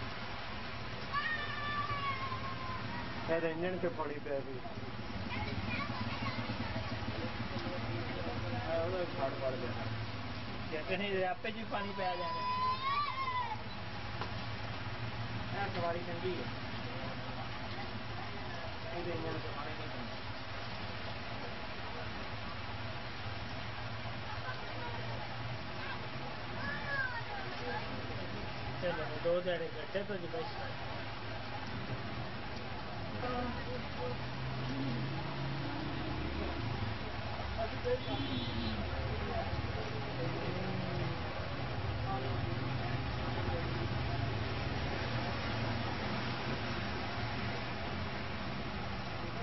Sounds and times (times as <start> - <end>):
Rain on surface: 0.0 - 49.4.